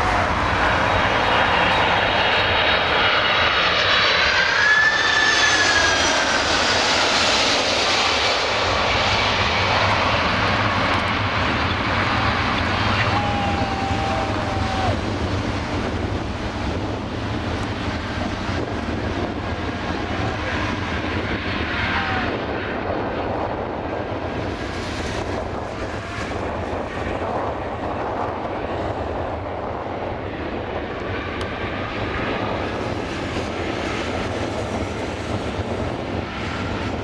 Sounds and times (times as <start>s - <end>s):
Aircraft engine: 0.0s - 37.0s
Fixed-wing aircraft, airplane: 0.0s - 37.0s
Outside, urban or manmade: 0.0s - 37.0s.